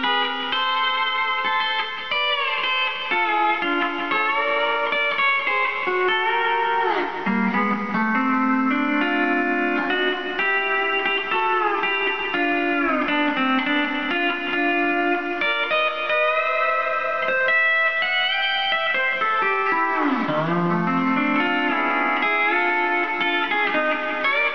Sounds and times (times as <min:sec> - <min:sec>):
Steel guitar, slide guitar: 0:00.0 - 0:24.5.